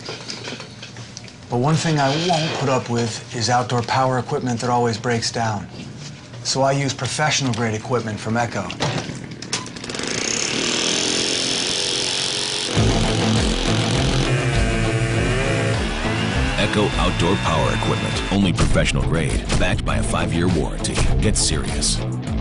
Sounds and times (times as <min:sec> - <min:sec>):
Speech: 0:01.5 - 0:05.8, 0:06.4 - 0:08.8, 0:16.6 - 0:22.0
Music: 0:12.7 - 0:22.4.